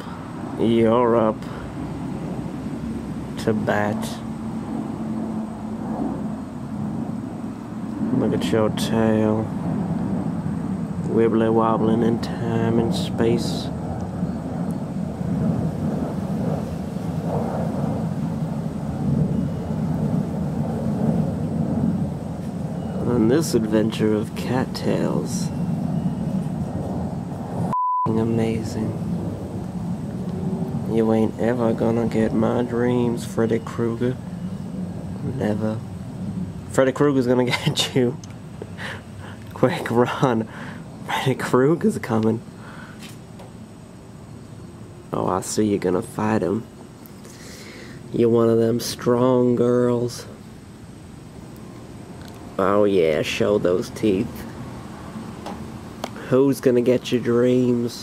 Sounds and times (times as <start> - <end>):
Speech: 0.6 - 1.6, 3.4 - 4.3, 8.1 - 9.5, 11.1 - 13.8, 23.0 - 25.5, 28.1 - 29.0, 30.9 - 34.2, 35.2 - 35.8, 36.7 - 38.2, 39.5 - 40.5, 41.1 - 42.5, 45.1 - 46.7, 48.1 - 50.4, 52.6 - 54.5, 56.2 - 58.0.